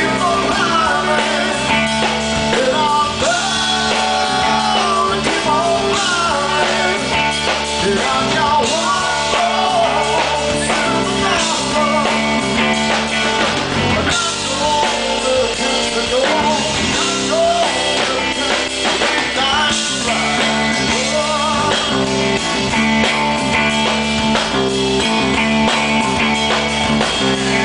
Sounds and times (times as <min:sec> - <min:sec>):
Funk: 0:00.0 - 0:27.6.